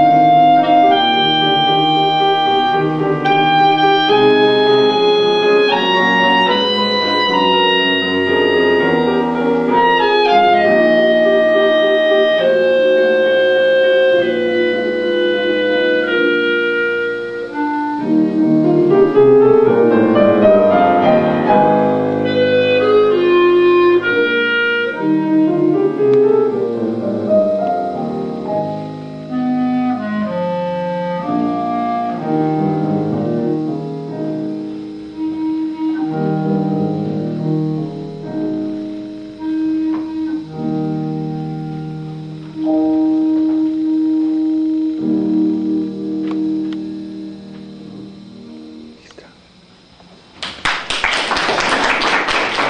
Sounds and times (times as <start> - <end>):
Classical music: 0.0 - 49.0
Clarinet: 0.0 - 49.9
Piano: 0.0 - 52.7.